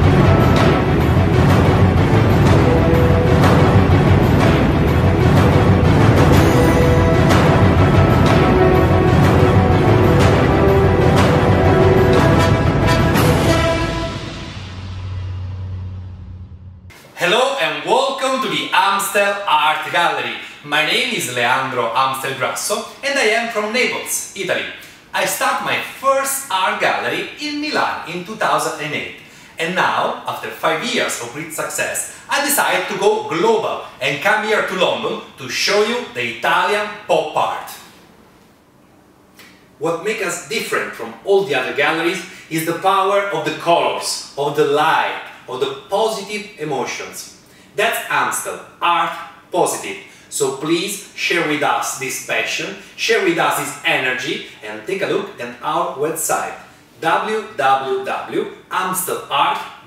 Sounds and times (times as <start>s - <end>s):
Speech: 17.2s - 37.9s, 39.8s - 59.8s.